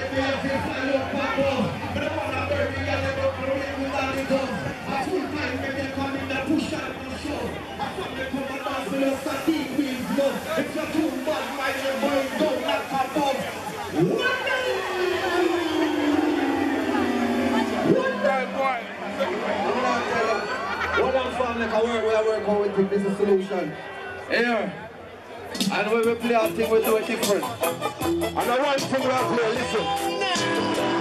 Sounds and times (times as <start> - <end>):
Speech: 0.0 - 27.6, 28.4 - 30.6.